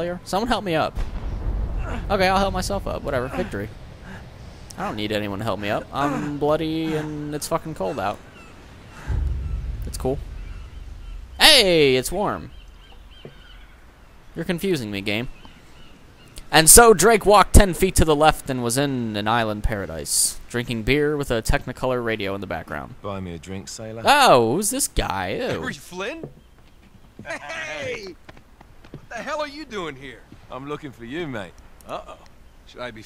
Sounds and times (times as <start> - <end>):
Speech: 0.0 - 0.9, 1.9 - 3.7, 4.8 - 8.2, 11.4 - 12.5, 16.5 - 26.3, 27.3 - 28.2, 29.1 - 33.0
Outside, rural or natural: 0.0 - 33.0.